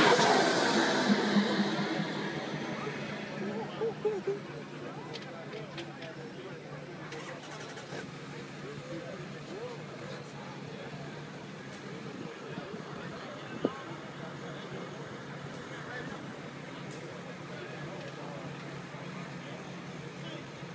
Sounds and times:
Car: 0.0s - 20.7s
Speech: 0.0s - 20.7s.

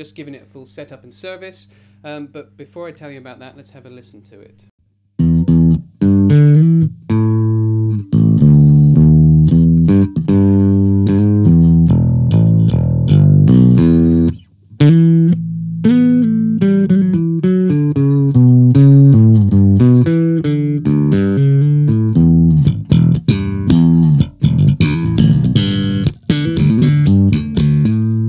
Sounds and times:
Speech: 0.0s - 4.7s
Strum: 5.2s - 28.2s.

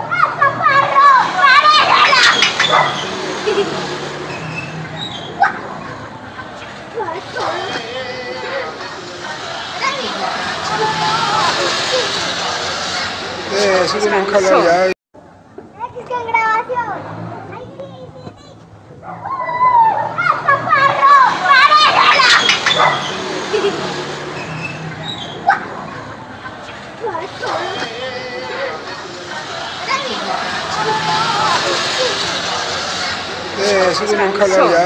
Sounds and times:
Motorcycle: 0.0s - 14.8s, 16.7s - 34.8s.

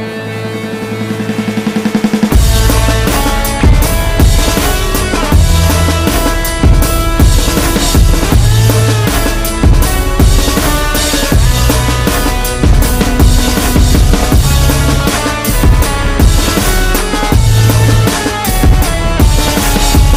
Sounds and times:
Electric guitar: 0.0s - 20.1s.

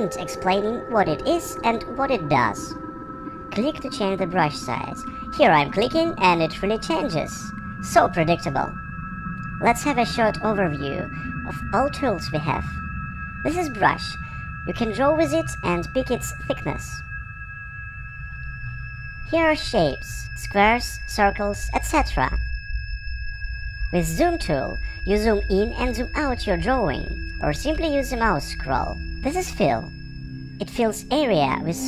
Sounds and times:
Speech: 0.0s - 2.8s, 3.6s - 8.8s, 9.6s - 12.7s, 13.5s - 17.0s, 19.3s - 22.4s, 24.0s - 29.9s, 30.6s - 31.8s
Music: 0.0s - 31.8s.

